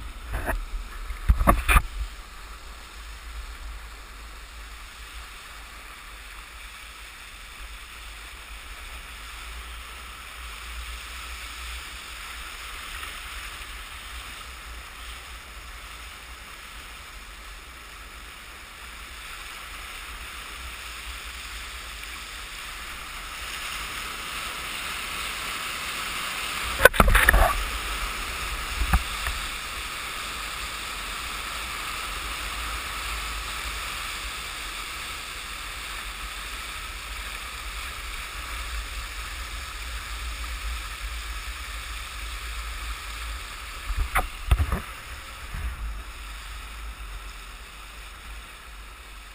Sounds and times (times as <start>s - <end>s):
Waves, surf: 0.0s - 49.3s.